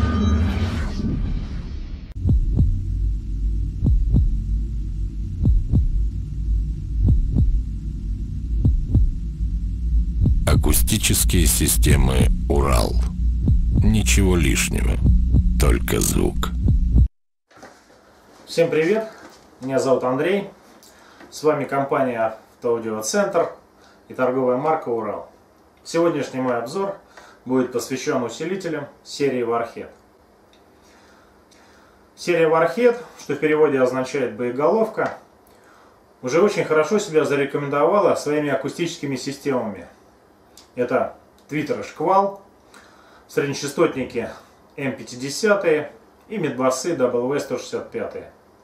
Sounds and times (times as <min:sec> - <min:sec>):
Speech: 0:10.5 - 0:13.1, 0:13.8 - 0:16.6, 0:18.5 - 0:20.6, 0:21.3 - 0:30.0, 0:32.2 - 0:35.3, 0:36.2 - 0:40.0, 0:40.8 - 0:42.5, 0:43.3 - 0:48.4.